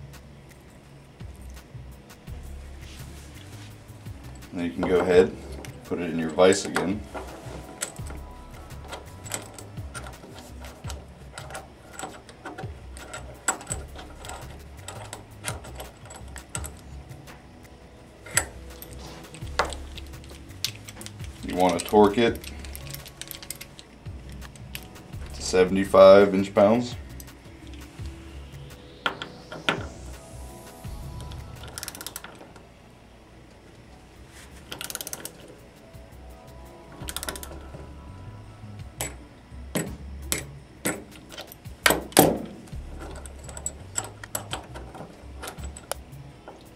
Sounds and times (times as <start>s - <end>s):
Music: 0.0s - 46.7s.